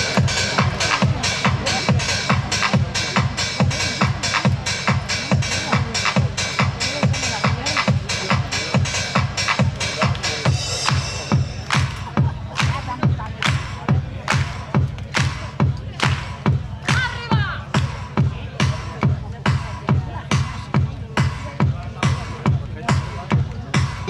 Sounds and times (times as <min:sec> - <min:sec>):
Speech: 0:00.0 - 0:24.1.